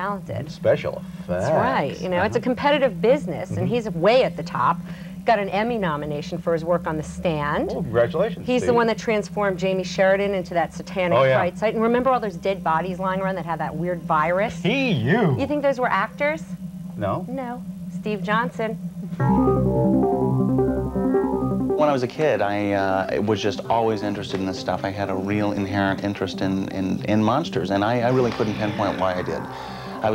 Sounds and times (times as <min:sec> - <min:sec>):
Speech: 0:00.4 - 0:04.8, 0:05.4 - 0:09.3, 0:10.8 - 0:16.4, 0:17.0 - 0:18.8, 0:21.8 - 0:30.1.